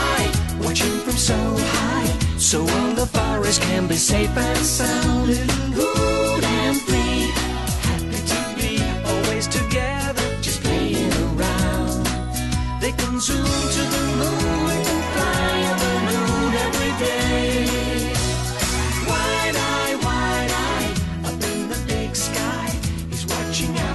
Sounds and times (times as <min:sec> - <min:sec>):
Music: 0:00.0 - 0:23.9.